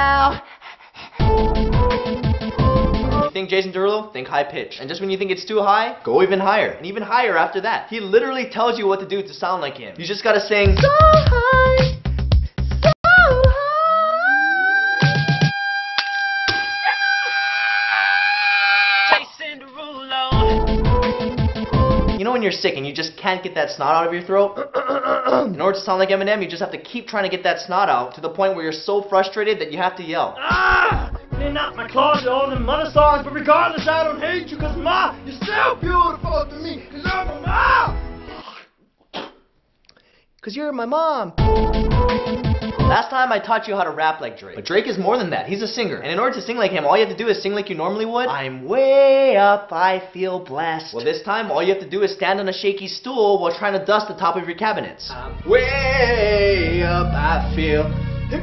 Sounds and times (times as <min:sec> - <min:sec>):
Music: 0:01.2 - 0:03.3, 0:10.6 - 0:13.6, 0:20.3 - 0:22.2, 0:30.5 - 0:38.4, 0:41.4 - 0:43.0, 0:55.0 - 0:58.4
Speech: 0:03.3 - 0:10.8, 0:22.2 - 0:24.6, 0:25.4 - 0:37.9, 0:40.4 - 0:41.4, 0:42.9 - 0:58.4.